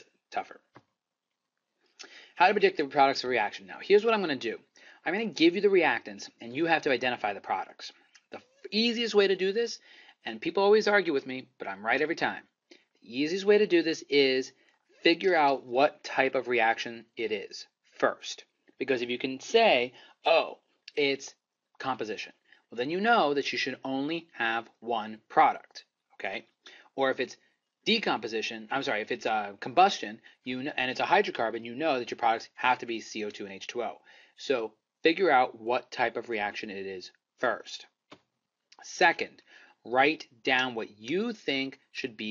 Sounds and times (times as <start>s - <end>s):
Speech: 0.0s - 0.7s, 2.4s - 12.5s, 13.1s - 37.9s, 38.8s - 42.3s.